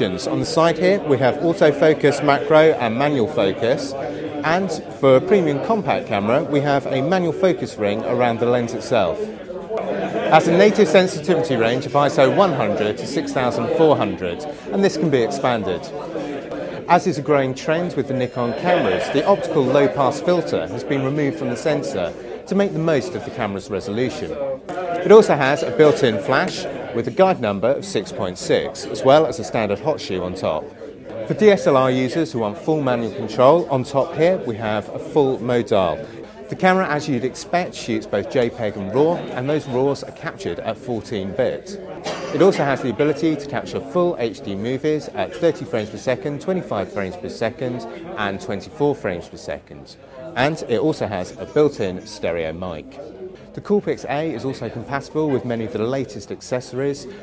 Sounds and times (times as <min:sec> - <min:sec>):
Speech: 0:00.0 - 0:57.2.